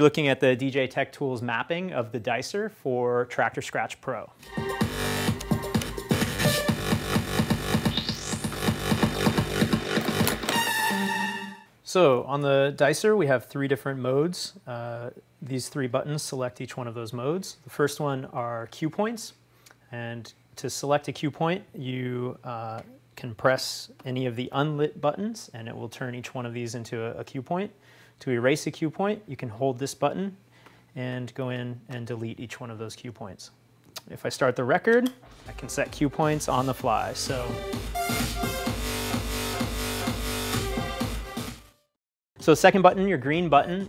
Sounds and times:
Speech: 0.0s - 4.4s, 11.8s - 30.4s, 31.0s - 37.6s, 42.4s - 43.8s
Music: 4.4s - 11.8s, 35.3s - 43.8s.

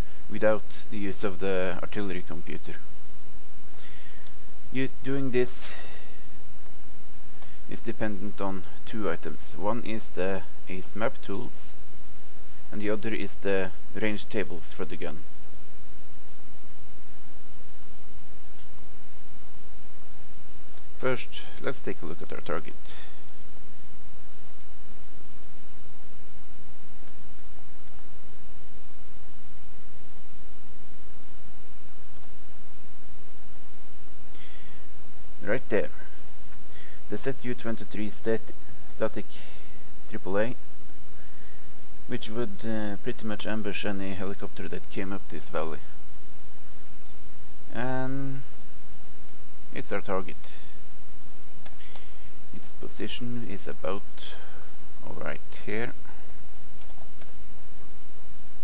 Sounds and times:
Speech: 0.3s - 2.9s, 4.7s - 6.1s, 7.7s - 11.8s, 12.7s - 15.3s, 21.0s - 23.2s, 35.4s - 36.1s, 37.1s - 39.5s, 40.1s - 40.6s, 42.1s - 45.9s, 47.7s - 48.5s, 49.7s - 50.8s, 52.6s - 56.1s.

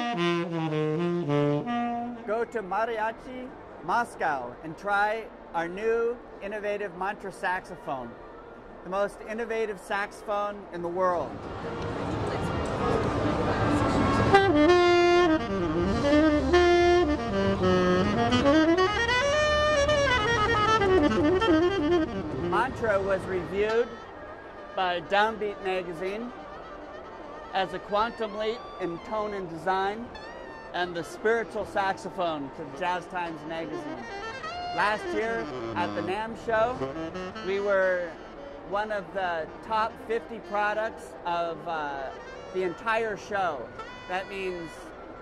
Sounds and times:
Music: 0.0s - 2.6s, 11.4s - 40.6s, 41.4s - 45.2s
Speech: 22.5s - 24.0s, 30.8s - 34.0s, 34.8s - 36.8s, 37.5s - 44.9s.

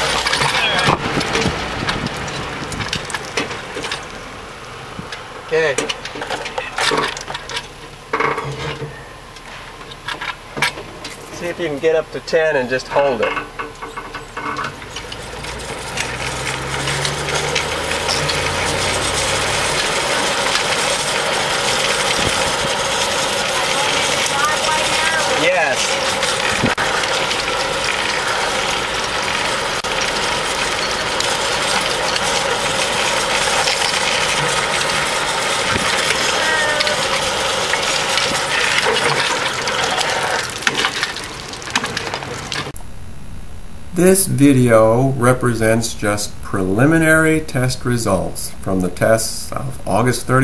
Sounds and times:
Skateboard: 33.6s - 42.8s.

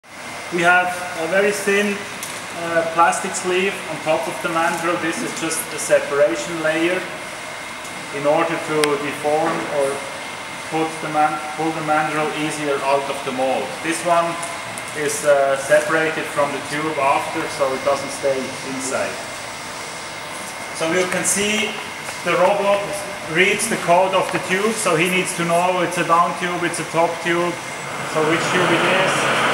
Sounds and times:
Speech: 0.5s - 2.0s, 2.6s - 7.2s, 8.1s - 10.1s, 10.7s - 19.2s, 20.8s - 29.4s.

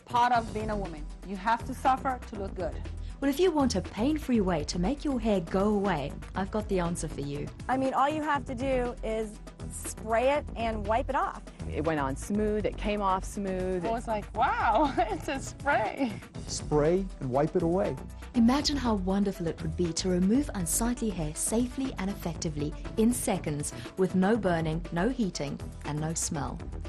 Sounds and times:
Music: 0.0s - 26.8s
Speech: 15.7s - 18.0s.

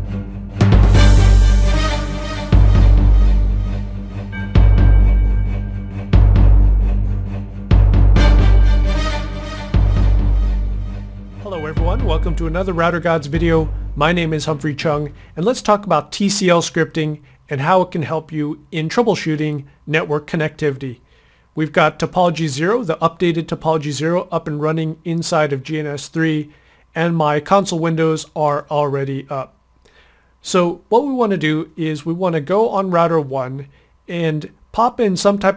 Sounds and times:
Speech: 11.5s - 21.0s, 21.6s - 29.6s, 30.4s - 35.5s.

